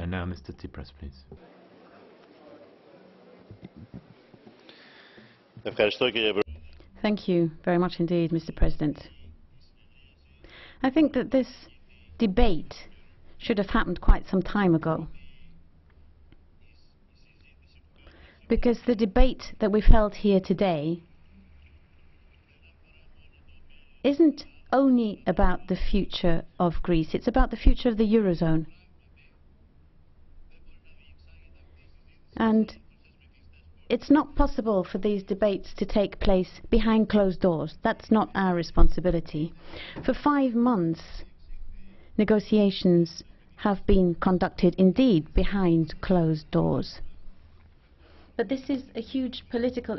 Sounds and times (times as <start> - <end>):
Narration, monologue: 0.0 - 1.5, 4.6 - 49.9
Female speech, woman speaking: 7.0 - 9.2, 10.8 - 15.2, 18.5 - 21.1, 24.0 - 28.7, 32.4 - 32.8, 33.9 - 41.3, 42.2 - 47.1, 48.4 - 49.9.